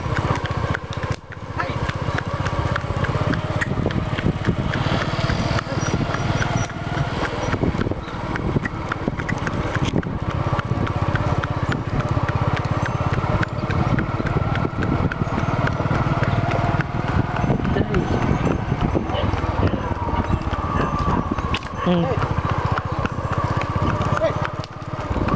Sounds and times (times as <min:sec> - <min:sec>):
Clip-clop: 0:00.0 - 0:25.3.